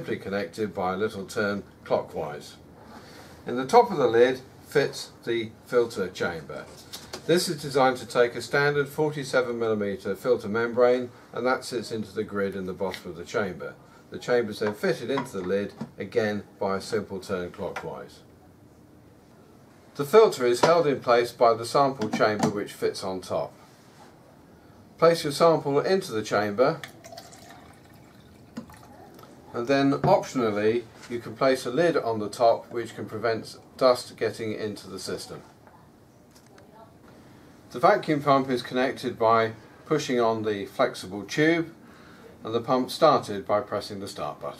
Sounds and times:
Speech: 0:00.0 - 0:02.6, 0:03.4 - 0:18.3, 0:20.0 - 0:23.6, 0:25.0 - 0:26.8, 0:29.5 - 0:37.0, 0:37.7 - 0:41.8, 0:42.4 - 0:44.5
Inside, small room: 0:00.0 - 0:44.5.

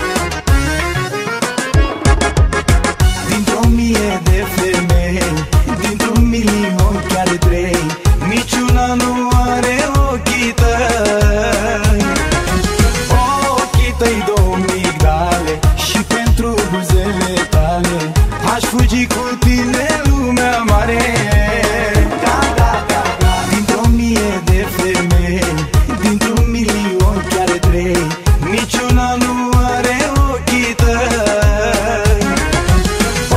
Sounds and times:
Middle Eastern music: 0:00.0 - 0:33.3.

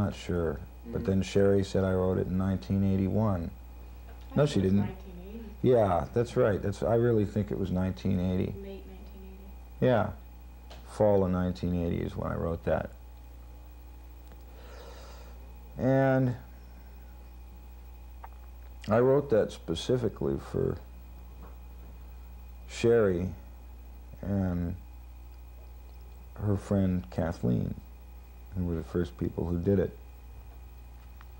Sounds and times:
Speech: 0:00.0 - 0:03.6, 0:04.2 - 0:10.2, 0:10.9 - 0:13.0, 0:15.8 - 0:16.5, 0:18.8 - 0:20.8, 0:22.7 - 0:23.4, 0:24.2 - 0:24.8, 0:26.4 - 0:27.8, 0:28.5 - 0:30.0.

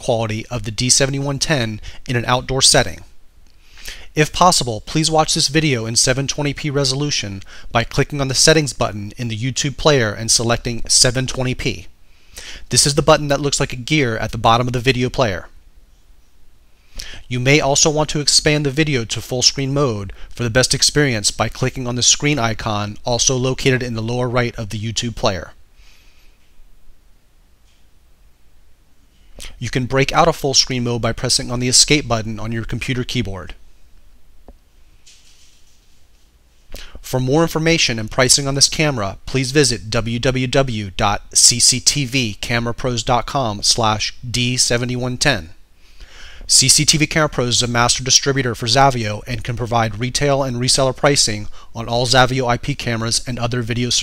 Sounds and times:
Speech: 0:00.0 - 0:03.1, 0:04.1 - 0:11.9, 0:12.7 - 0:15.6, 0:17.2 - 0:25.6, 0:29.4 - 0:33.6, 0:37.0 - 0:45.6, 0:46.5 - 0:54.0.

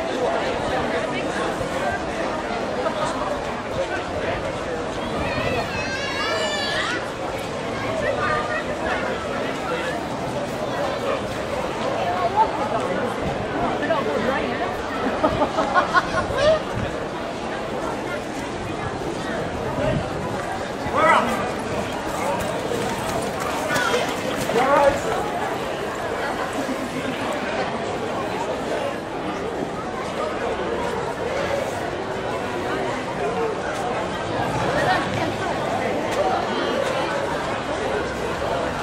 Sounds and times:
Speech: 0:00.0 - 0:38.8.

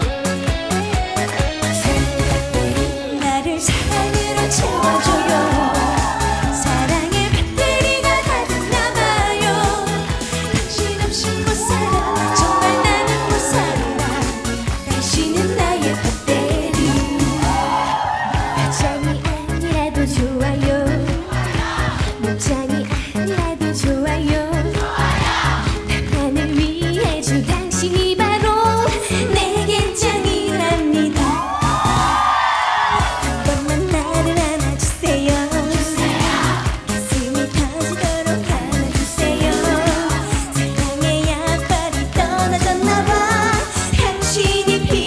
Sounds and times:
Singing: 0:03.1 - 0:22.8, 0:23.4 - 0:45.0.

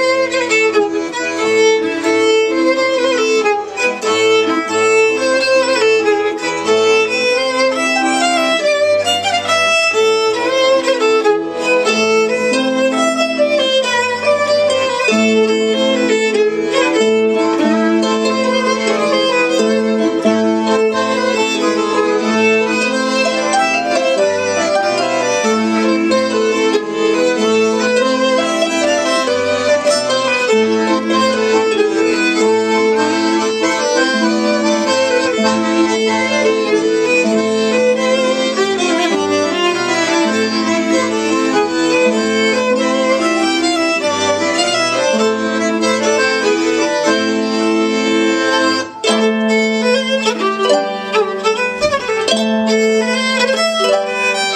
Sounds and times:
Violin, fiddle: 0:00.0 - 0:54.5.

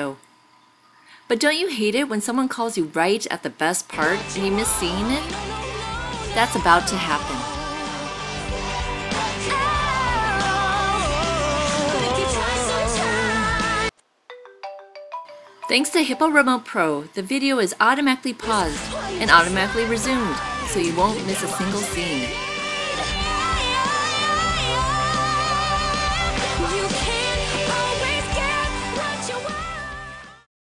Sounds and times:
Speech: 0:00.0 - 0:00.2, 0:01.3 - 0:05.4, 0:06.3 - 0:07.7, 0:15.7 - 0:22.4
Music: 0:03.9 - 0:16.2, 0:18.4 - 0:30.5.

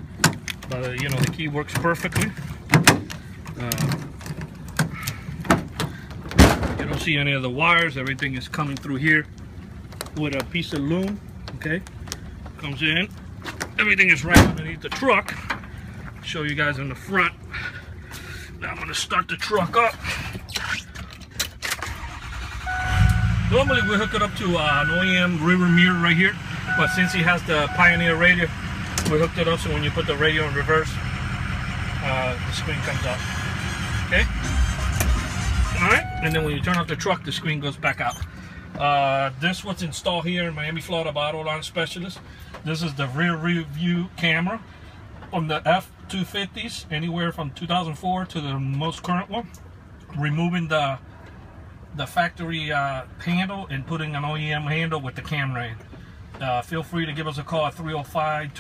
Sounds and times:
Speech: 0:00.7 - 0:02.4, 0:06.8 - 0:09.3, 0:12.6 - 0:13.1, 0:13.8 - 0:15.4, 0:18.6 - 0:20.0, 0:23.5 - 0:31.0, 0:32.0 - 0:33.2, 0:35.8 - 0:38.2, 0:38.8 - 0:44.6, 0:45.3 - 0:49.5, 0:50.1 - 0:51.0, 0:52.0 - 0:55.8, 0:56.4 - 0:58.6.

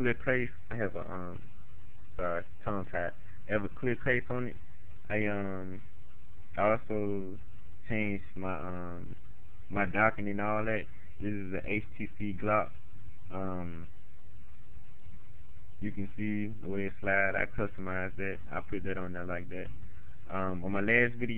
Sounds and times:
Speech: 0:00.0 - 0:01.4, 0:02.2 - 0:05.9, 0:06.5 - 0:13.9, 0:15.8 - 0:21.3.

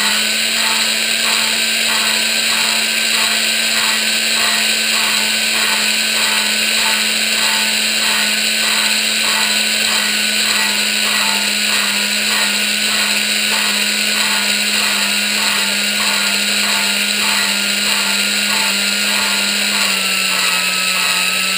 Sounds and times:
Power tool: 0:00.0 - 0:21.5.

